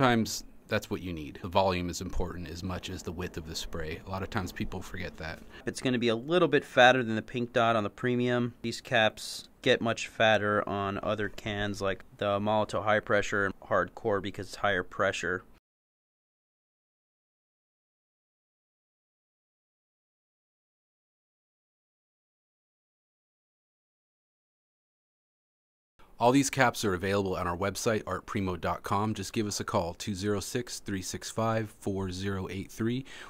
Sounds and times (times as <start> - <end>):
Speech: 0.0 - 15.6, 26.2 - 33.3.